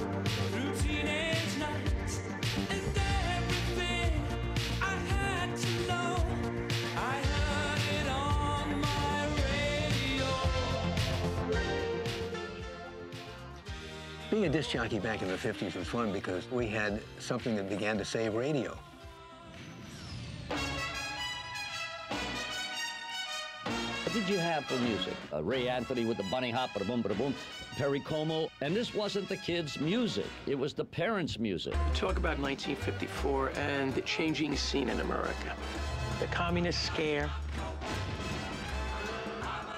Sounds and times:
Music: 0.0 - 39.7
Speech: 14.3 - 18.8, 24.0 - 35.6, 36.2 - 37.4.

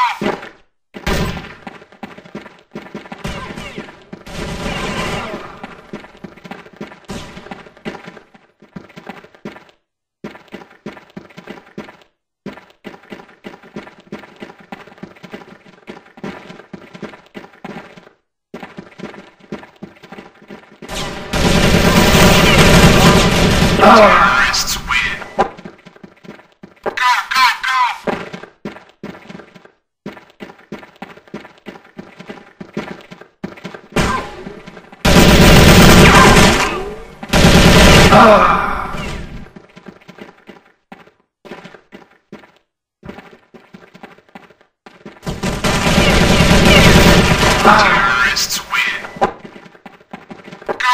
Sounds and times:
Speech: 23.8 - 25.3, 26.9 - 28.1, 47.6 - 49.2.

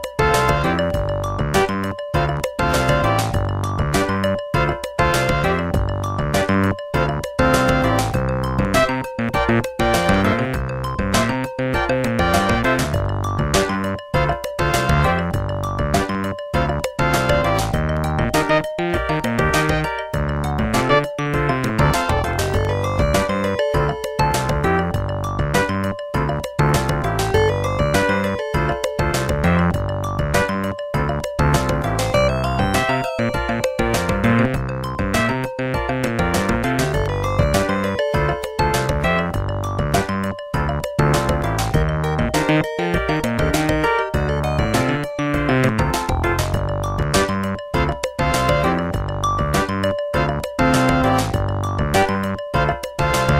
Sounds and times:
Exciting music: 0.0 - 53.3.

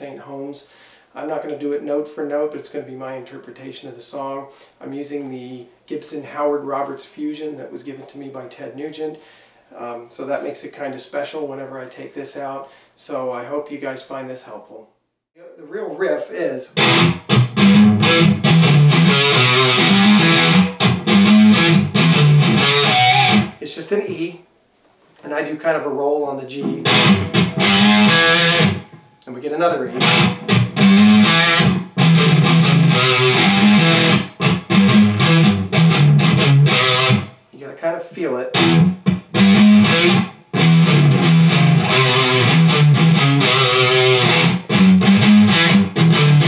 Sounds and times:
Speech: 0.0 - 16.8, 23.6 - 24.5, 25.2 - 26.9, 29.2 - 30.0, 37.5 - 38.6
Electric guitar: 16.8 - 23.6, 26.6 - 29.0, 29.9 - 37.4, 38.5 - 46.4
Strum: 16.8 - 24.2, 26.6 - 29.1, 29.9 - 37.4, 38.6 - 46.4.

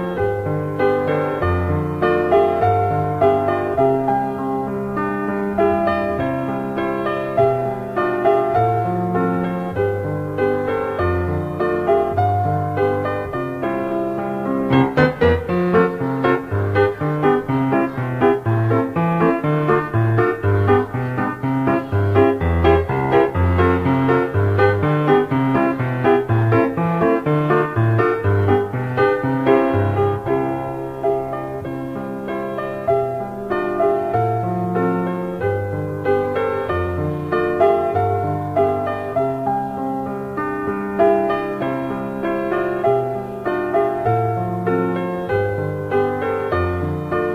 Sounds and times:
Music: 0.0 - 47.3.

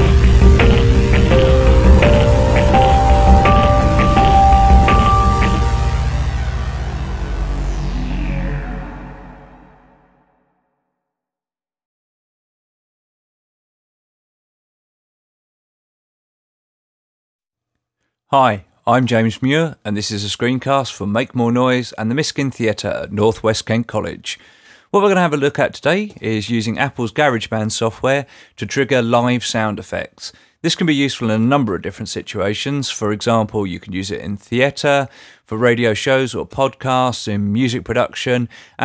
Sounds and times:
Speech: 18.3 - 38.8.

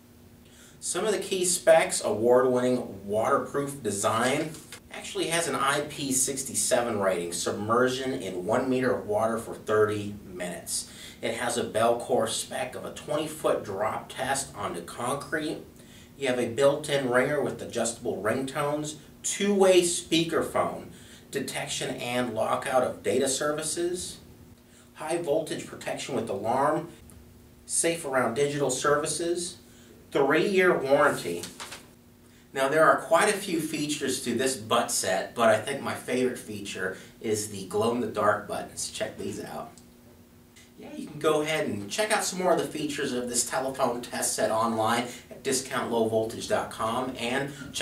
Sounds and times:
Speech: 0.8 - 24.2, 25.0 - 27.0, 27.7 - 31.6, 32.5 - 39.8, 40.6 - 47.8.

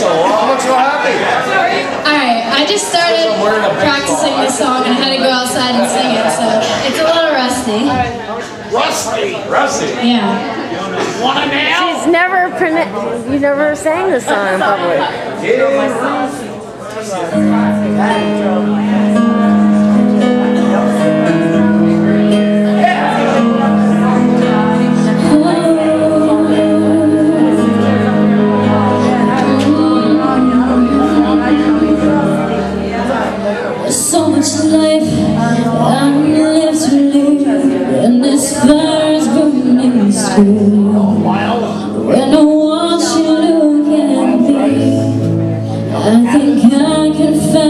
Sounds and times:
Music: 17.3 - 47.6
Female singing: 25.1 - 28.0, 28.8 - 32.5, 33.9 - 41.2, 42.0 - 45.2, 45.9 - 47.6.

